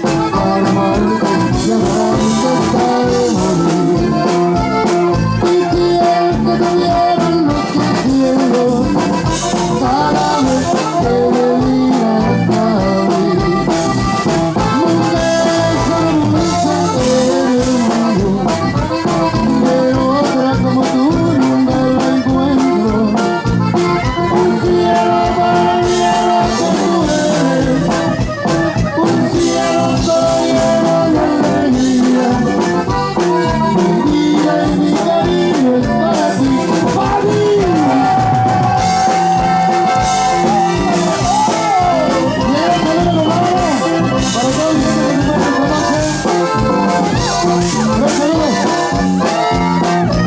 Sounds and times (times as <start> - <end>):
Music: 0.0 - 50.2.